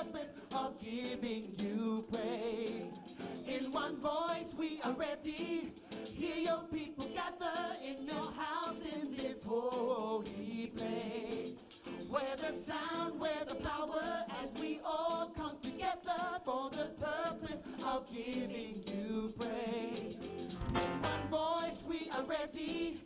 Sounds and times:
Music: 0.0s - 23.0s.

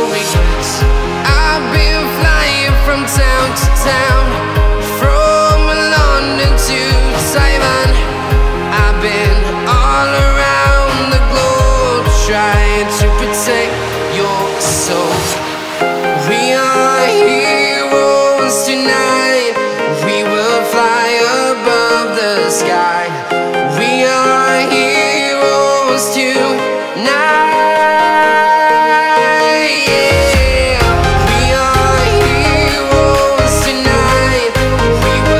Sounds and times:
Background music: 0.0s - 35.3s
Dance music: 0.0s - 35.3s
Pop music: 0.0s - 35.3s.

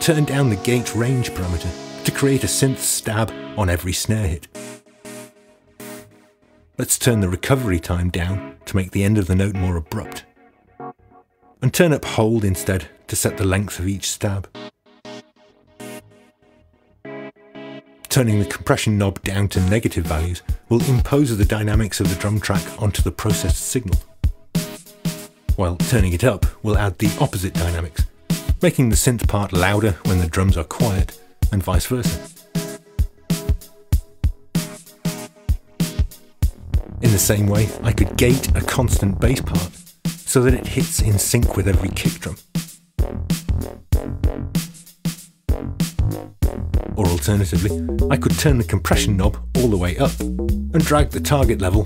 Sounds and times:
Speech: 0.0s - 4.5s, 6.8s - 10.2s, 11.6s - 14.6s, 18.1s - 24.0s, 25.6s - 32.3s, 37.0s - 42.4s, 47.0s - 50.2s, 50.8s - 51.8s
Drum: 31.0s - 51.8s.

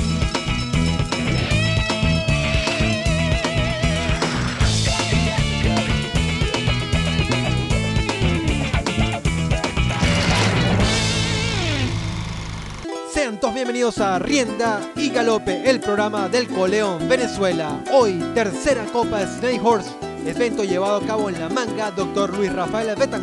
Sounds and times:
Music: 0.0s - 23.2s
Speech: 13.1s - 23.2s.

